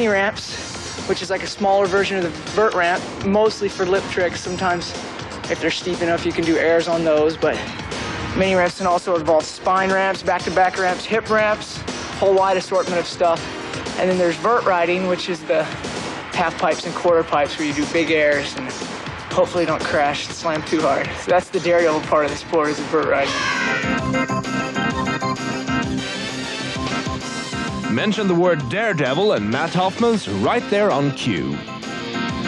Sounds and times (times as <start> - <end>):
Speech: 0.0 - 7.7, 8.4 - 13.4, 14.0 - 23.4, 27.9 - 31.6
Music: 0.0 - 32.4.